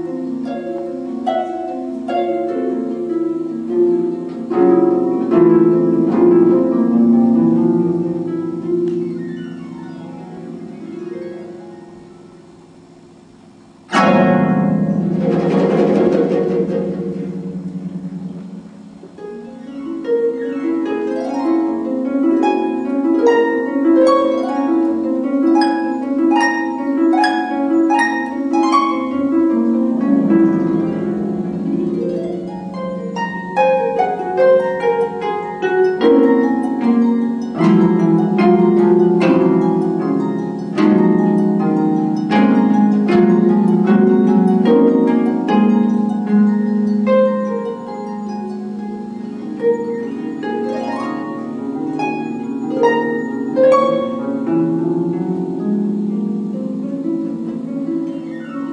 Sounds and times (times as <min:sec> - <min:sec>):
Harp: 0:00.0 - 0:58.7.